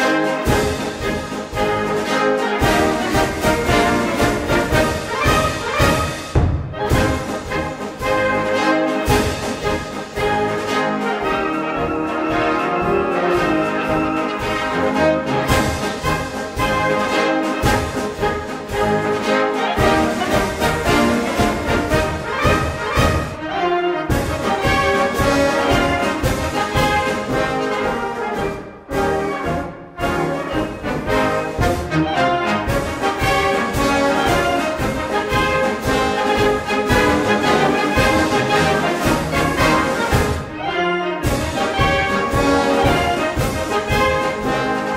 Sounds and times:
Music: 0.0s - 44.9s.

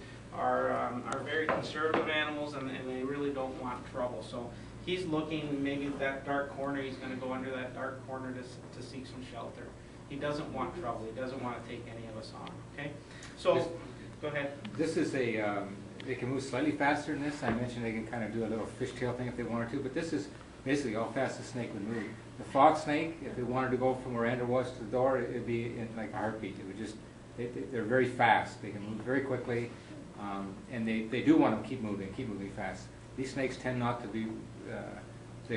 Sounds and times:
Speech: 0.3s - 35.5s.

